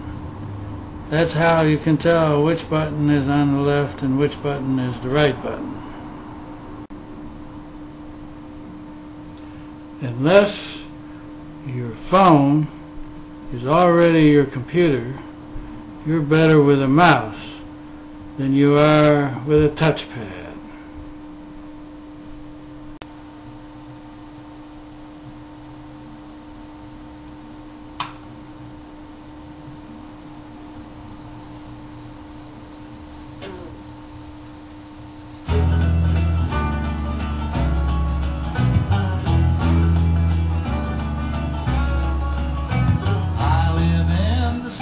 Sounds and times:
Speech: 1.1s - 5.8s, 10.0s - 11.0s, 11.6s - 12.8s, 13.5s - 15.3s, 16.0s - 17.7s, 18.4s - 20.7s.

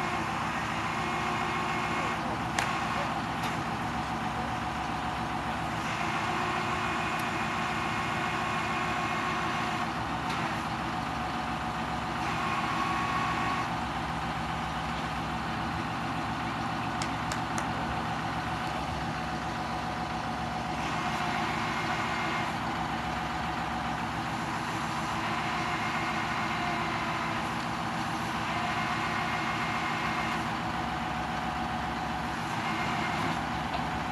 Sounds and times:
Truck: 0.0s - 34.1s.

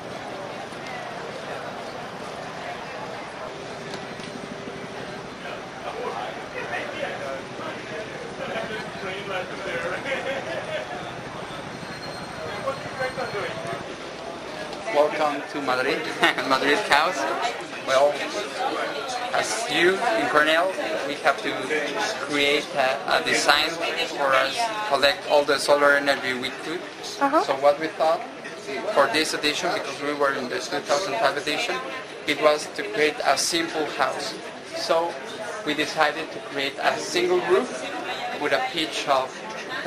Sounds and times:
Inside, public space: 0.0s - 39.8s
Speech: 12.3s - 39.8s.

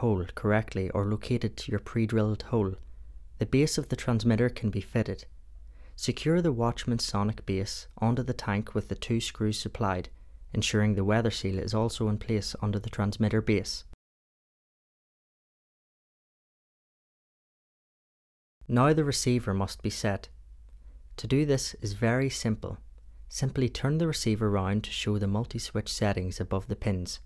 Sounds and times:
Speech: 0.0s - 2.8s, 3.4s - 5.3s, 6.0s - 14.0s, 18.7s - 20.4s, 21.2s - 27.2s.

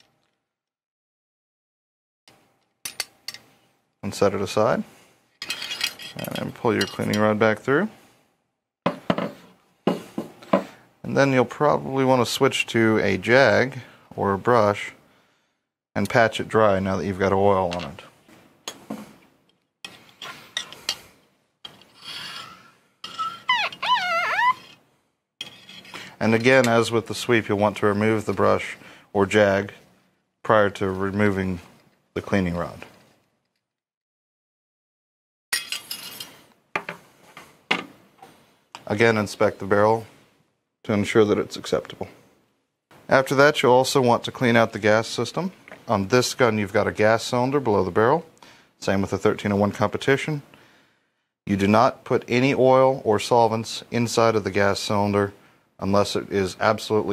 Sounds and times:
Speech: 4.0s - 4.9s, 6.2s - 8.0s, 11.0s - 15.0s, 16.0s - 18.2s, 26.2s - 29.8s, 30.4s - 33.0s, 38.8s - 40.1s, 40.8s - 42.2s, 43.1s - 50.5s, 51.5s - 57.1s.

